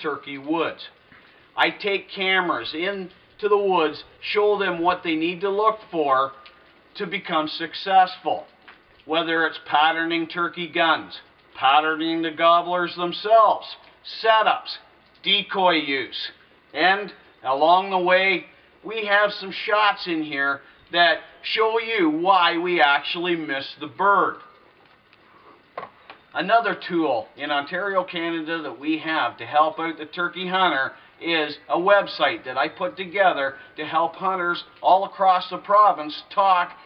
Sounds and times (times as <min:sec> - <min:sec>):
Speech: 0:00.0 - 0:01.0, 0:01.6 - 0:06.4, 0:07.0 - 0:08.5, 0:09.1 - 0:24.5, 0:26.4 - 0:36.8.